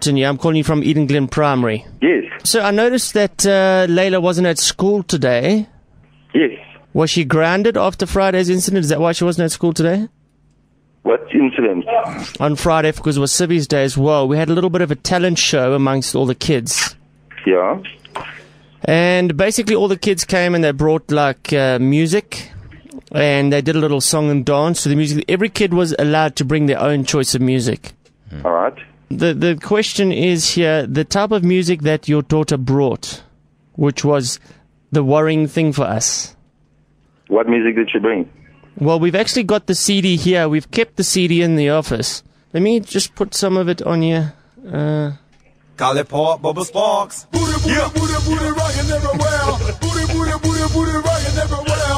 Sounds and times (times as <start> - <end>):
Speech: 0.0 - 5.7, 6.4 - 10.1, 11.1 - 36.4, 37.3 - 45.2, 45.8 - 47.9.